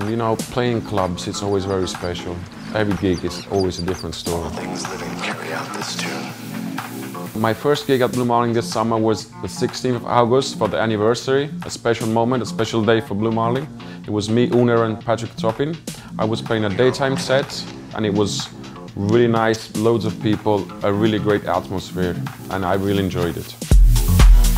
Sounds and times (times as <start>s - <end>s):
Speech: 0.0s - 6.4s, 7.4s - 23.7s
Music: 0.0s - 24.5s.